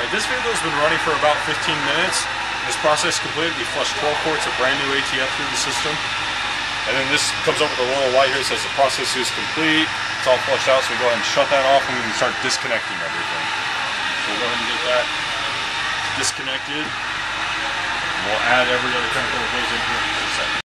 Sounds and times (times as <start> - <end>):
Speech: 0.0 - 6.0, 6.9 - 13.5, 14.2 - 15.6, 16.2 - 17.0, 18.2 - 20.6.